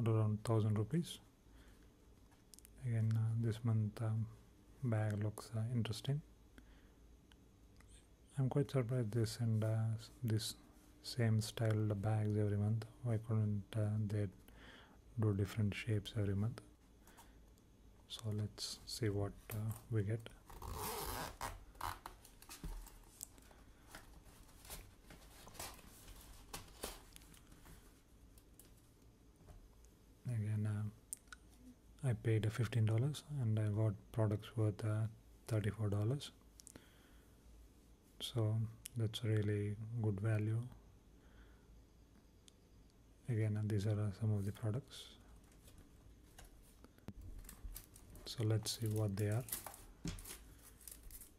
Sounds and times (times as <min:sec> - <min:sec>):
Speech: 0:00.0 - 0:01.2, 0:02.8 - 0:06.3, 0:08.3 - 0:14.4, 0:15.2 - 0:16.7, 0:18.1 - 0:20.4, 0:30.2 - 0:31.0, 0:32.0 - 0:36.4, 0:38.2 - 0:40.8, 0:43.2 - 0:45.2, 0:48.2 - 0:49.6
Inside, small room: 0:00.0 - 0:51.3.